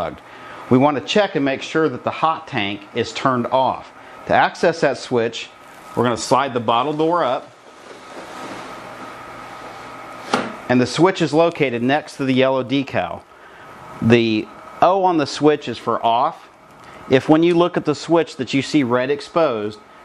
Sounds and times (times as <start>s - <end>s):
Speech: 0.0s - 7.5s, 10.7s - 13.2s, 14.0s - 16.5s, 17.1s - 19.8s.